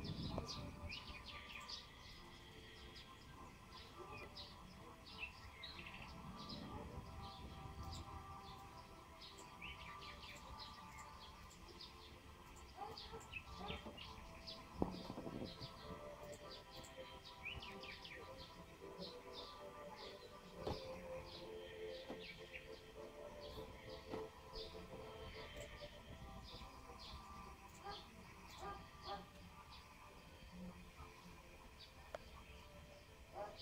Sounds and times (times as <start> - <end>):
Music: 0.0 - 33.6.